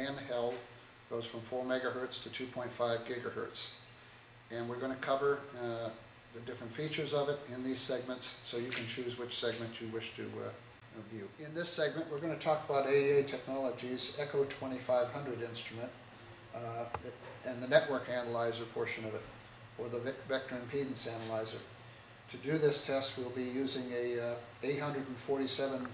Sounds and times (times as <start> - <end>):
Speech: 0.0 - 3.8, 4.5 - 16.0, 16.6 - 21.7, 22.3 - 25.9.